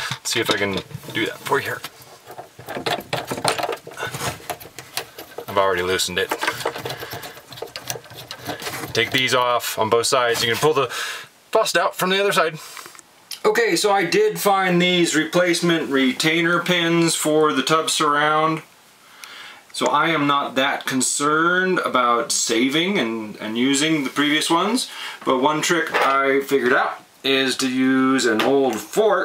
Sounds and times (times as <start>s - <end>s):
Speech: 0.0s - 1.9s, 5.5s - 6.6s, 8.8s - 12.6s, 13.4s - 18.7s, 19.8s - 29.2s.